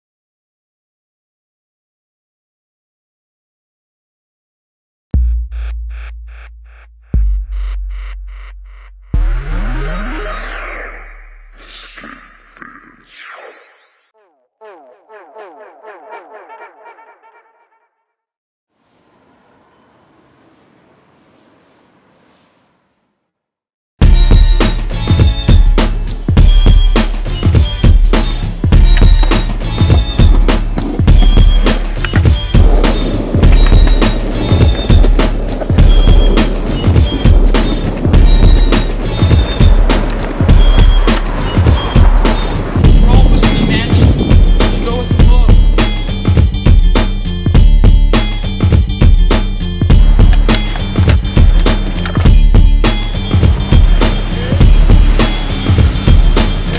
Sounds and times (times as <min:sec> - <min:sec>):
Music: 0:05.2 - 0:11.8, 0:24.0 - 0:56.7.